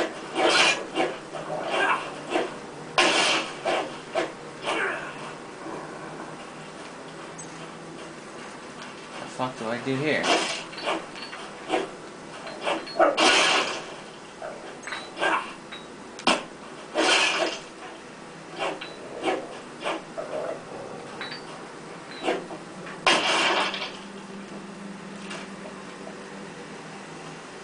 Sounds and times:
Speech: 0:09.3 - 0:10.3.

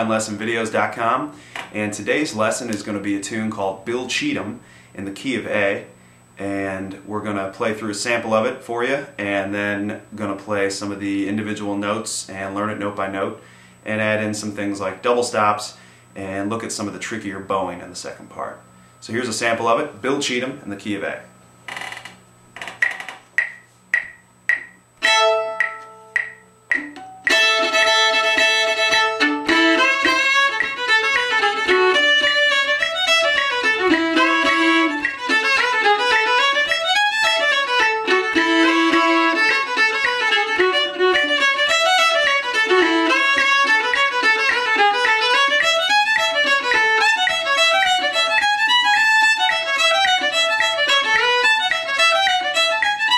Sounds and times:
Speech: 0:00.0 - 0:21.3
Violin, fiddle: 0:25.0 - 0:25.7, 0:27.3 - 0:53.1
Bluegrass: 0:27.3 - 0:53.1.

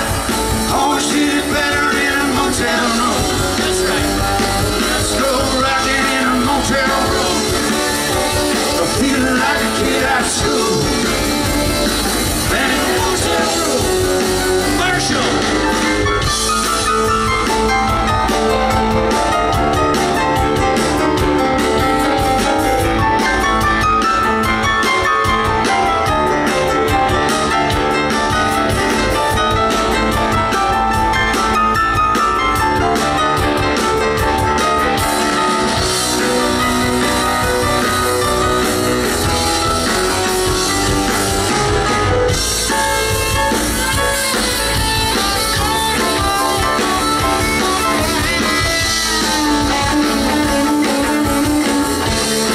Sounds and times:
Music: 0:00.0 - 0:52.5
Speech: 0:14.7 - 0:15.6.

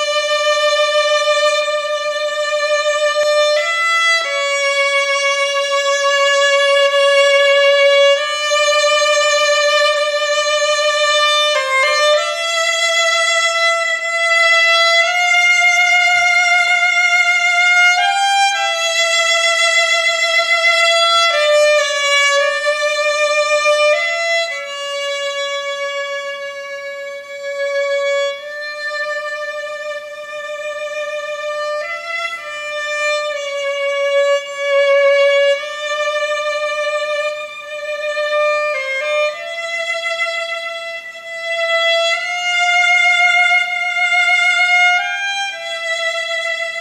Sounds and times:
Violin, fiddle: 0:00.0 - 0:46.8.

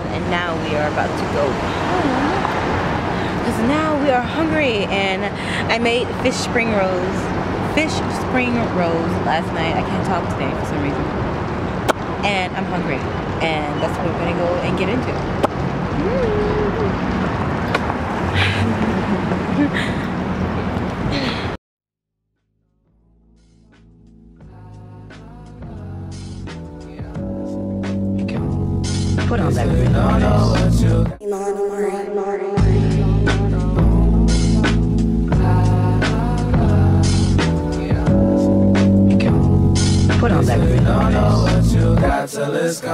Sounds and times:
Outside, urban or manmade: 0:00.0 - 0:21.6, 0:22.2 - 0:42.9
Speech: 0:03.5 - 0:11.1, 0:12.2 - 0:15.2, 0:29.3 - 0:29.9
Music: 0:22.4 - 0:42.3.

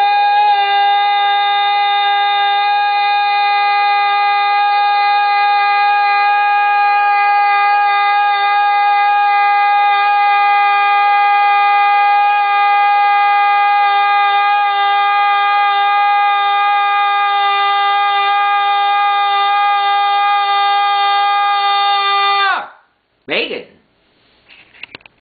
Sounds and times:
Speech: 0:23.3 - 0:23.8.

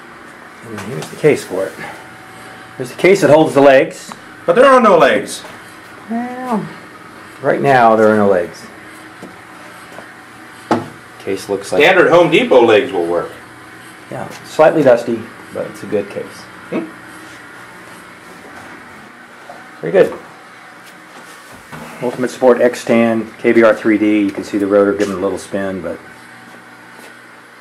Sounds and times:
Speech: 0:00.6 - 0:02.0, 0:02.8 - 0:05.5, 0:07.4 - 0:08.7, 0:11.2 - 0:13.4, 0:14.1 - 0:16.9, 0:19.8 - 0:20.3, 0:22.0 - 0:26.1.

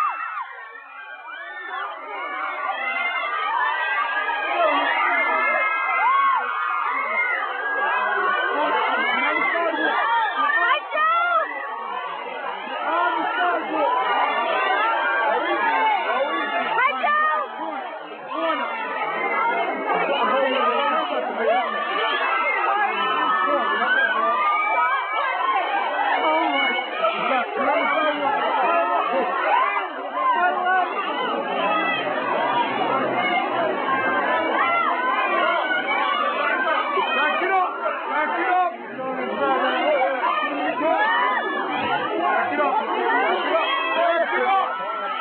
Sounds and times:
Speech: 0:01.8 - 0:45.2.

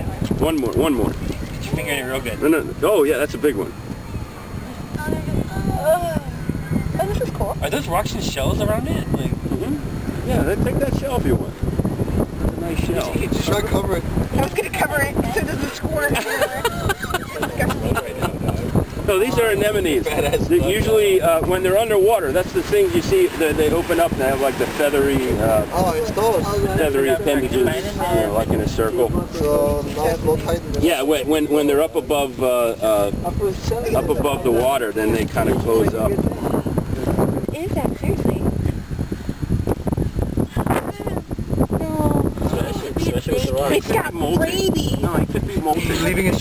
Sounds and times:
Outside, rural or natural: 0:00.0 - 0:46.4
Speech: 0:19.2 - 0:36.3, 0:41.8 - 0:46.4.

